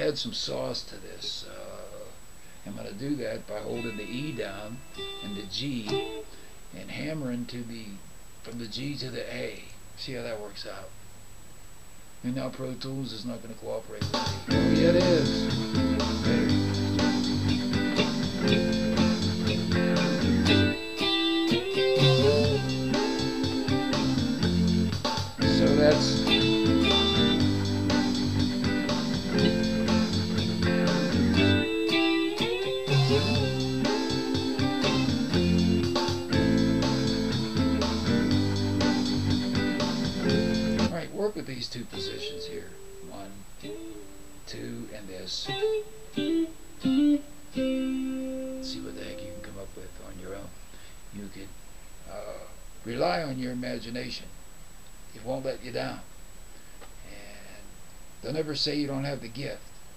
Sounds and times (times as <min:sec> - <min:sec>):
Speech: 0:00.0 - 0:06.1, 0:06.8 - 0:11.0, 0:12.2 - 0:15.5, 0:25.4 - 0:26.4, 0:40.8 - 0:43.5, 0:44.5 - 0:45.6, 0:48.6 - 0:54.3, 0:55.1 - 0:56.1, 0:57.1 - 0:59.7
Electric guitar: 0:03.6 - 0:06.5, 0:14.0 - 0:41.0, 0:41.9 - 0:49.8.